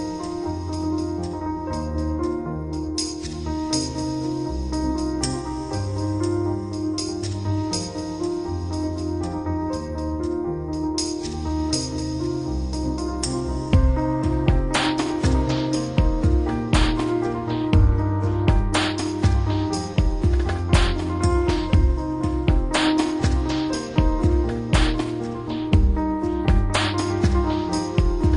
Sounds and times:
Music: 0.0 - 28.3.

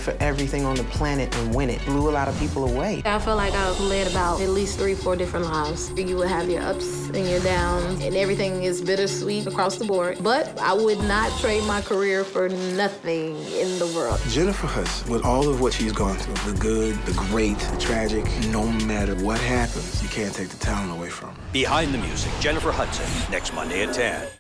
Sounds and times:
Music: 0.0 - 24.4
Speech: 0.0 - 24.4.

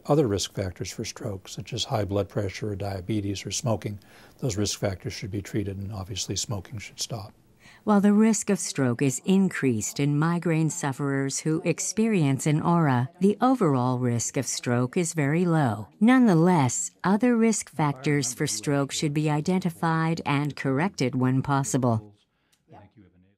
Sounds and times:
Conversation: 0.0 - 23.3.

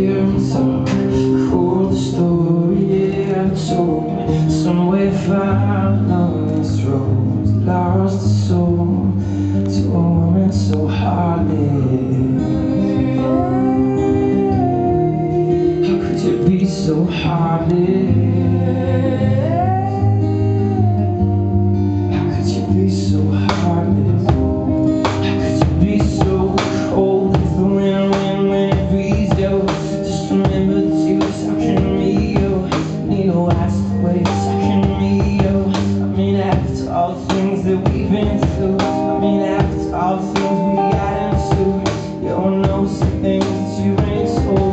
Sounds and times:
Music: 0.0 - 44.7.

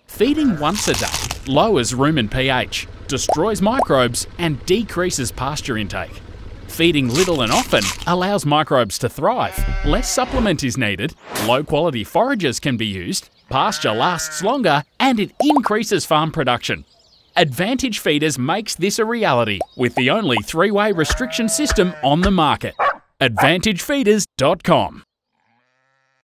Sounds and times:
Speech: 0.1 - 16.8, 17.4 - 25.1
Bleat: 0.3 - 1.1, 9.3 - 10.6, 13.5 - 14.6, 21.0 - 22.3, 25.3 - 26.2.

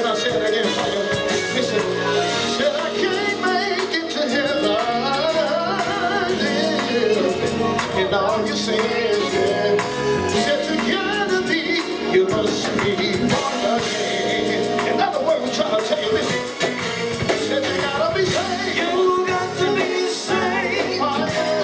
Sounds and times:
Male singing: 0.0 - 16.6, 17.2 - 21.6
Music: 0.0 - 21.6.

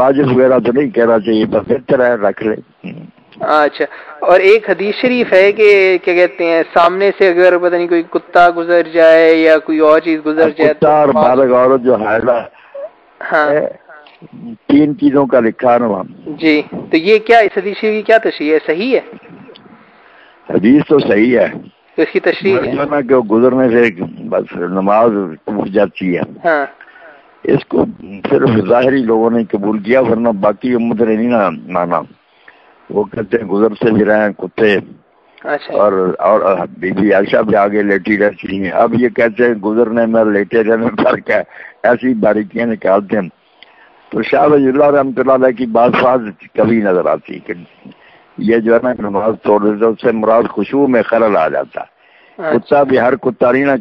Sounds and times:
Speech: 20.5 - 26.7, 48.4 - 53.8.

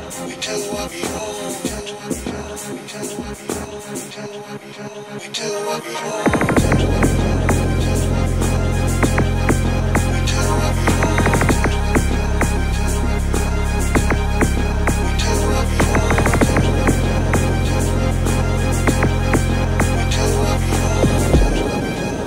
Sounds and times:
Electronic music: 0.0 - 22.2.

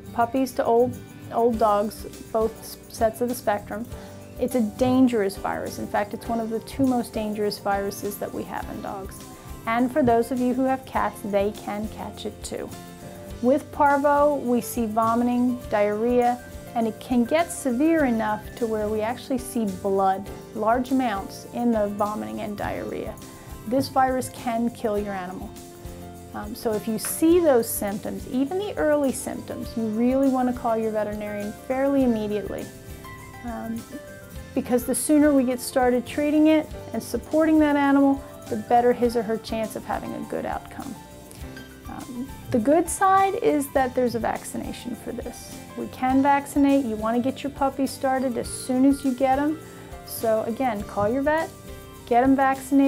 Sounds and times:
Music: 0.0 - 52.8
Speech: 0.2 - 12.7, 13.4 - 25.5, 26.4 - 32.7, 33.4 - 34.0, 34.6 - 41.0, 41.9 - 51.5, 52.1 - 52.8.

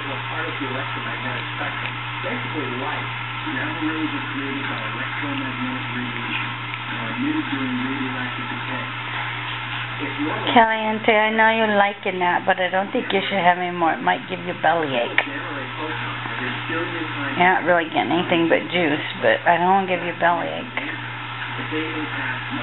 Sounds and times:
Speech: 0.0 - 9.2, 9.8 - 22.6.

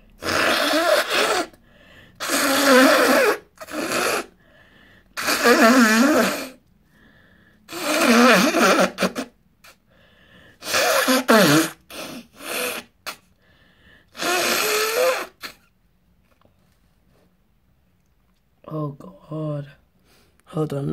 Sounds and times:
Sneeze: 0.2 - 1.6, 2.2 - 4.3, 5.2 - 6.6, 7.7 - 9.8, 10.6 - 13.3, 14.2 - 15.7.

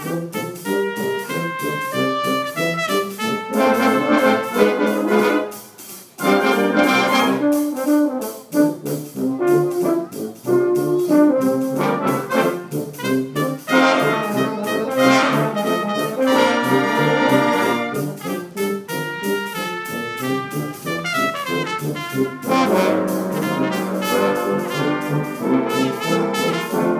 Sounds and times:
Trombone: 0.0 - 26.9
Trumpet: 0.0 - 26.9.

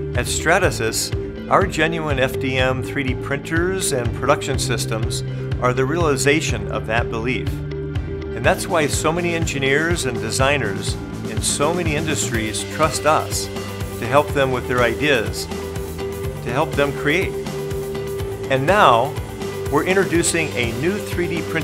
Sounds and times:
Music: 0.0 - 21.6
Speech: 0.2 - 7.6, 8.4 - 15.5, 16.4 - 17.4, 18.5 - 21.6.

